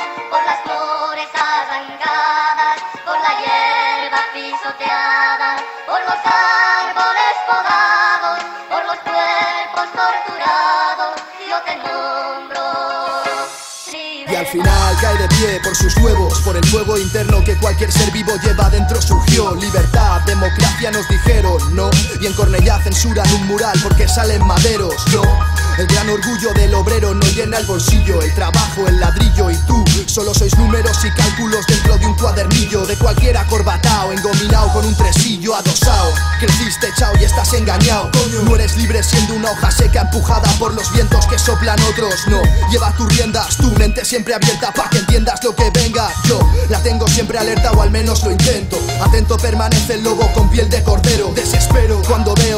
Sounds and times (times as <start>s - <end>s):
Music: 0.0s - 52.5s.